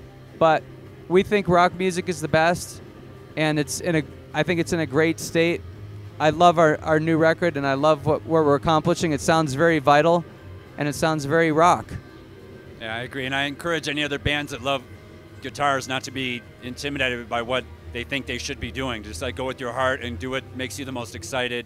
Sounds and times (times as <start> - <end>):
Speech: 0.4 - 2.8, 3.4 - 5.6, 6.2 - 10.2, 10.8 - 12.0, 12.8 - 14.8, 15.4 - 21.6.